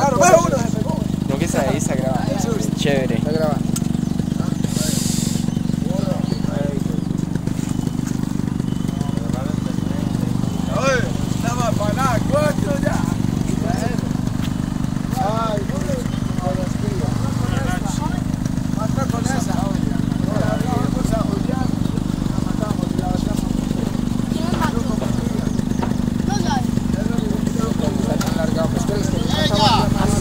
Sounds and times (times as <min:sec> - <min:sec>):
Outside, rural or natural: 0:00.0 - 0:30.2.